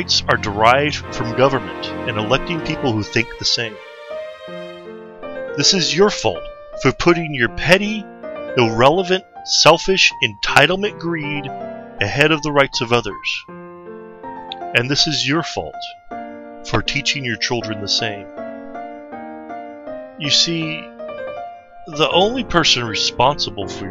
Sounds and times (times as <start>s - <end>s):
Narration, monologue: 0.0s - 23.9s.